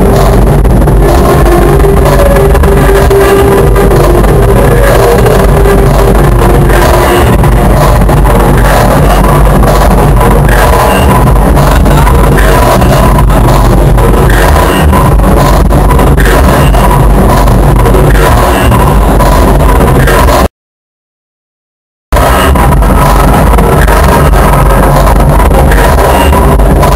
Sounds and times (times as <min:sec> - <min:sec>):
Techno: 0:00.0 - 0:20.5, 0:22.2 - 0:26.9.